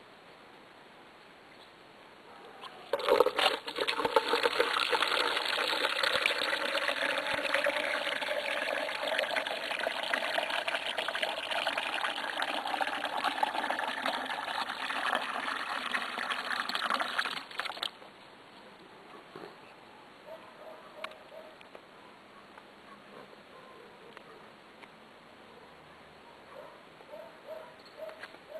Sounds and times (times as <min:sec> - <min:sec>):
Water: 0:02.6 - 0:18.0.